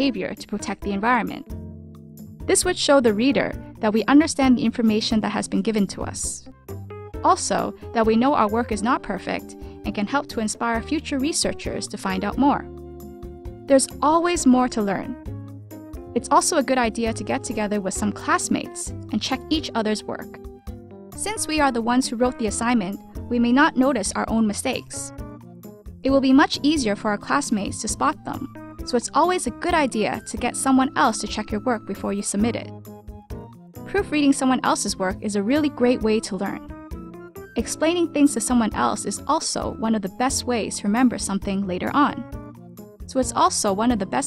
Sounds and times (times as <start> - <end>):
Speech: 0.0 - 1.4, 2.5 - 6.5, 7.2 - 12.7, 13.7 - 15.2, 16.2 - 20.4, 21.2 - 25.1, 26.1 - 32.7, 33.9 - 36.7, 37.6 - 42.2, 43.1 - 44.2
Music: 0.0 - 44.2.